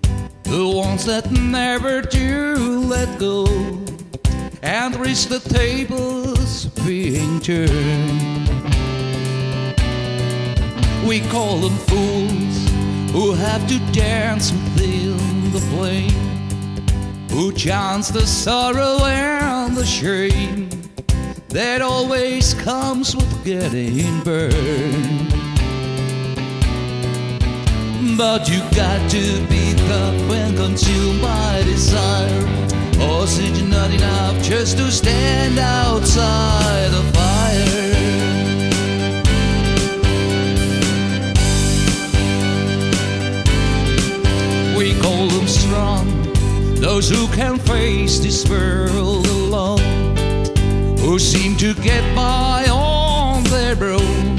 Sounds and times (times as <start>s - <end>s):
Music: 0.0s - 54.3s.